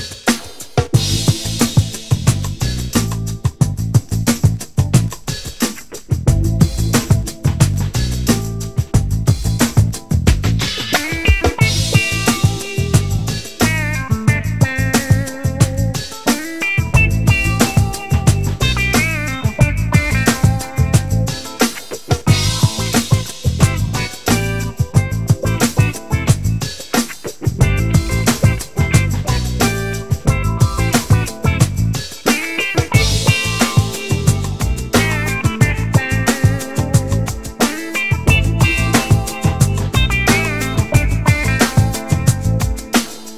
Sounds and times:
Music: 0:00.0 - 0:43.3.

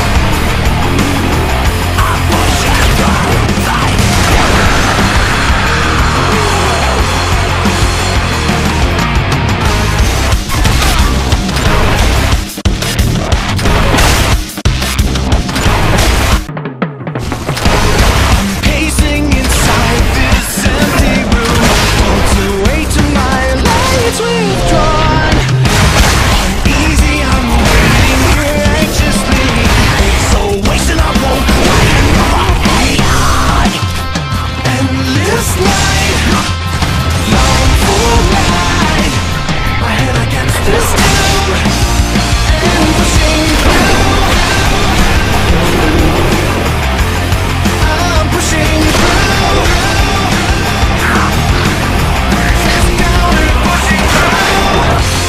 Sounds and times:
Music: 0:00.0 - 0:55.2.

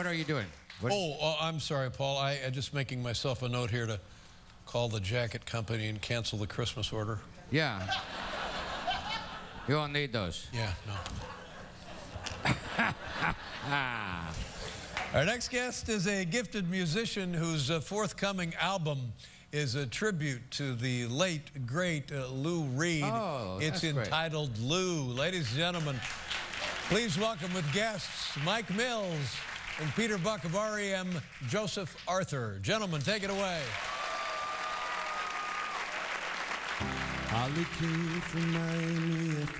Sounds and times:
Speech: 0:15.2 - 0:26.0.

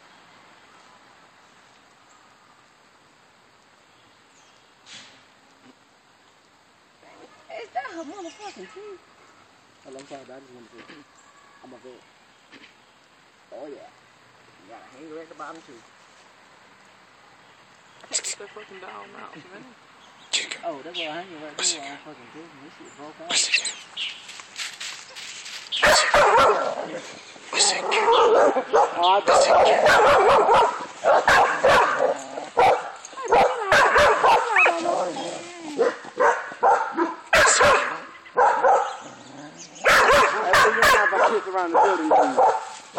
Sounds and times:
Outside, rural or natural: 0:00.0 - 0:42.9
Bark: 0:25.8 - 0:26.9, 0:27.9 - 0:34.7, 0:35.8 - 0:39.0, 0:39.8 - 0:42.9
Bow-wow: 0:25.8 - 0:26.9, 0:27.9 - 0:34.8, 0:35.8 - 0:39.0, 0:39.8 - 0:42.8.

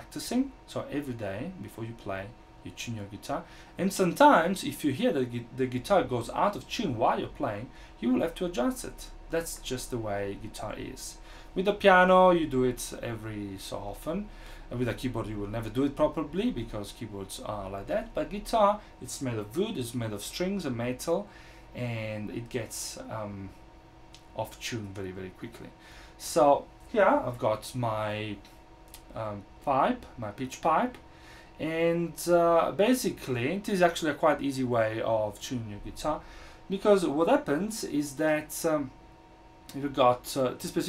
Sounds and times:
Speech: 0:00.0 - 0:23.6, 0:24.3 - 0:31.0, 0:31.6 - 0:39.0, 0:39.7 - 0:40.8.

